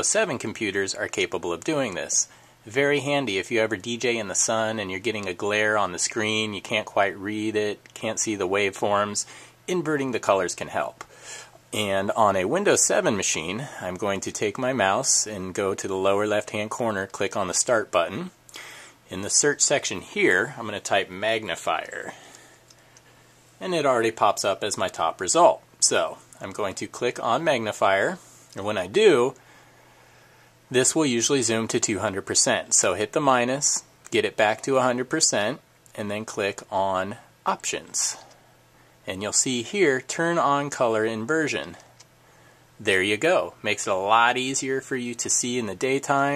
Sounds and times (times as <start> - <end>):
Speech: 0.0 - 11.1, 11.7 - 18.4, 19.1 - 22.5, 23.6 - 29.4, 30.7 - 38.4, 39.0 - 42.0, 42.8 - 46.3.